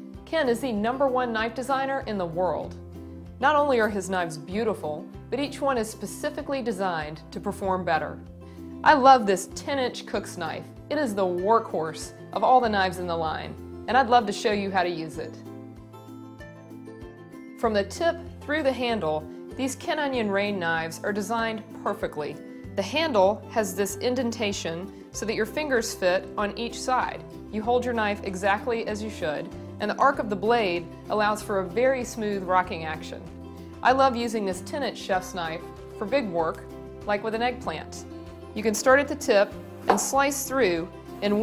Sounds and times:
Music: 0.0 - 41.4
Speech: 0.3 - 2.7, 3.4 - 8.2, 8.8 - 15.4, 17.6 - 41.4.

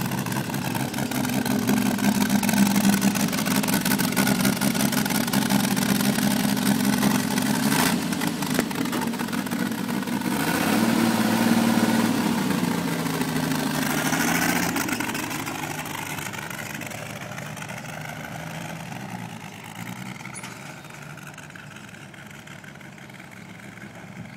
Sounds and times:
Truck: 0.0 - 24.3.

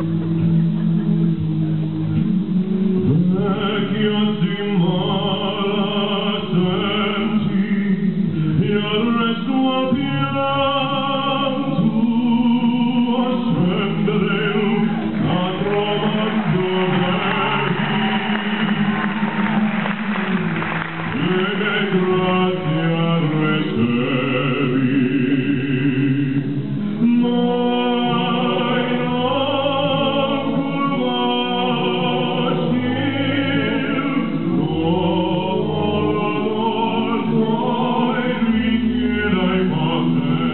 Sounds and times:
Opera: 0.0 - 40.5
A capella: 2.3 - 40.5.

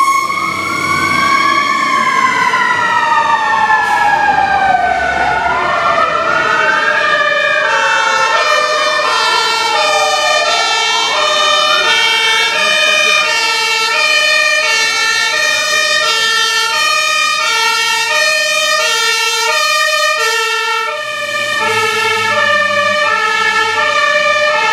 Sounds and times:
Fire engine, fire truck (siren): 0.0 - 24.7.

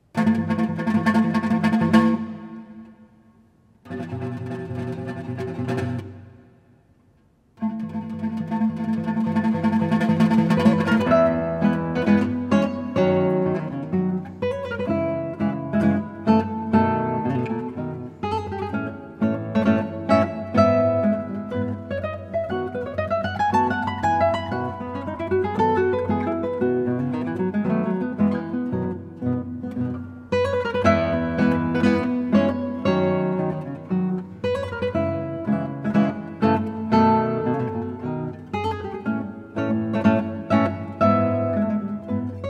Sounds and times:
Acoustic guitar: 0.0 - 42.4
Strum: 0.0 - 42.4.

